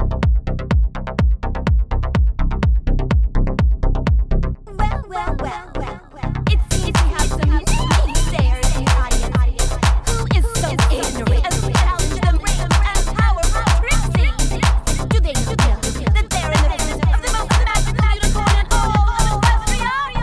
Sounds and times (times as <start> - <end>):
Techno: 0.0 - 20.2.